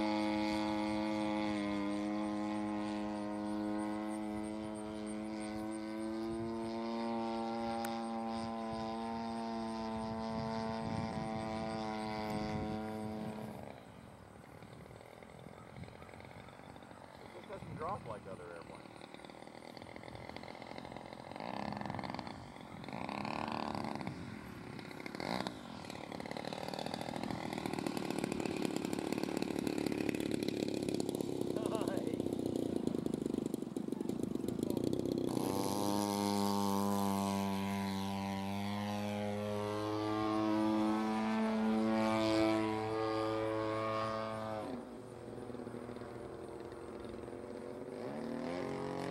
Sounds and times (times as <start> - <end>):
Speech: 17.3 - 18.8, 31.6 - 32.2.